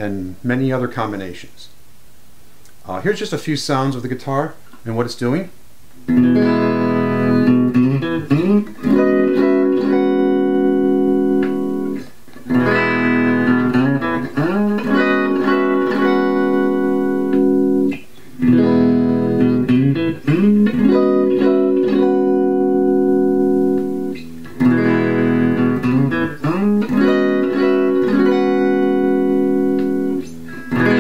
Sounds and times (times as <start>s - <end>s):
Speech: 0.0s - 1.8s, 2.8s - 5.6s
Electric guitar: 6.0s - 31.0s
Electronic tuner: 6.0s - 31.0s
Bass guitar: 6.1s - 31.0s.